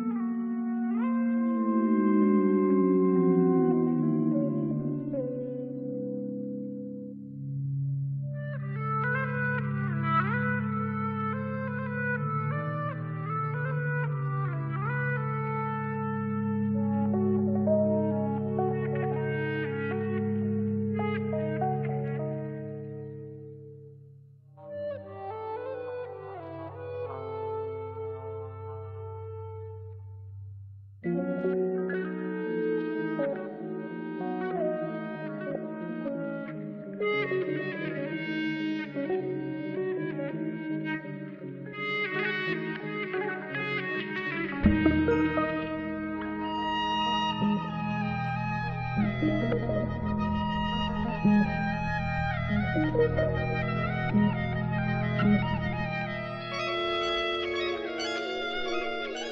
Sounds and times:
Electric guitar: 0.0 - 23.9, 31.0 - 59.3.

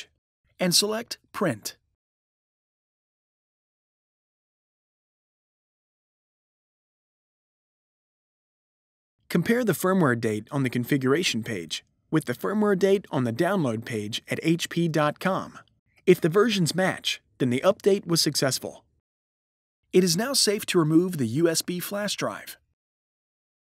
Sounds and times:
Speech: 0.0 - 1.8, 9.3 - 18.8, 20.0 - 22.6.

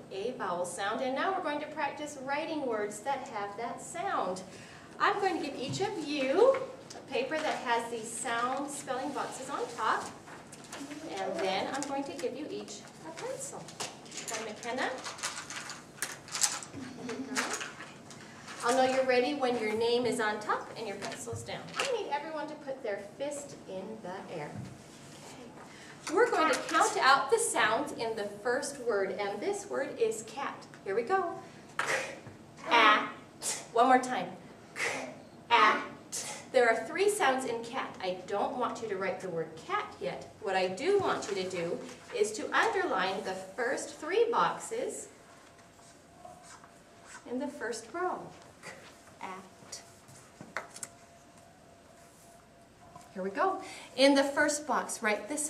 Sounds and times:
Speech: 0.1 - 10.2, 10.8 - 13.7, 18.6 - 24.7, 26.1 - 31.4, 36.6 - 45.1.

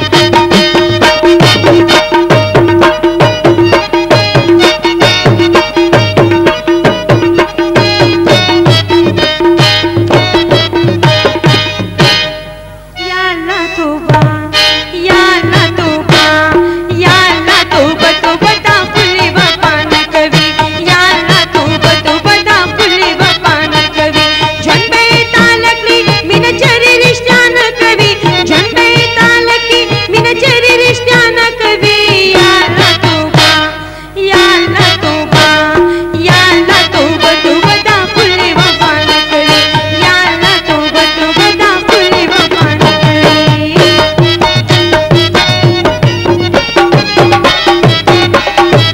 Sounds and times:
Music: 0.0 - 48.9.

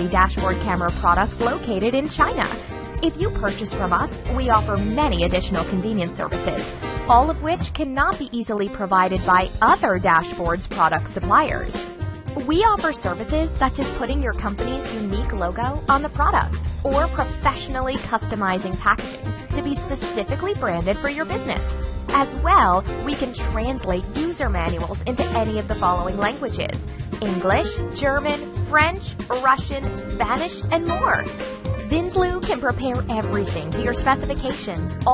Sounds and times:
Speech: 0.0 - 11.8, 12.4 - 31.3, 31.9 - 35.1
Music: 0.0 - 35.1.

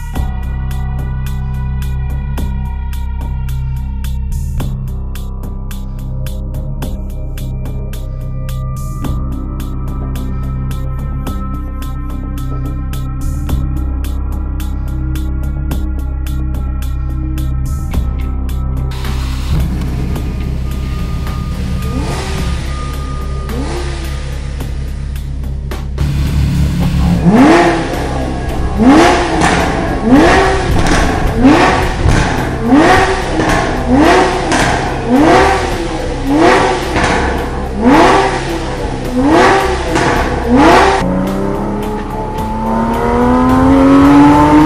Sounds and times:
Music: 0.0 - 44.6.

